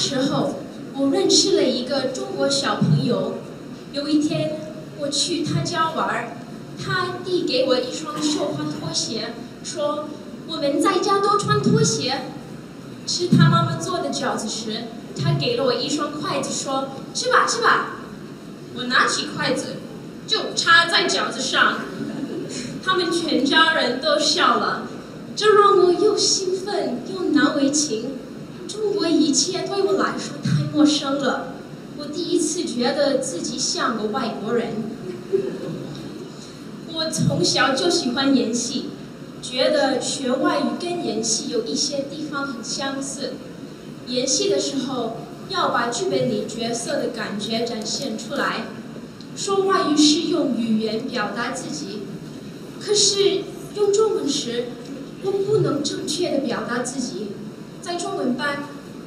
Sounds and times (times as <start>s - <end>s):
Female speech, woman speaking: 0.0s - 12.4s, 13.1s - 18.1s, 18.8s - 35.0s, 36.9s - 43.4s, 44.1s - 48.8s, 49.4s - 52.1s, 52.8s - 58.8s
Narration, monologue: 0.0s - 59.0s.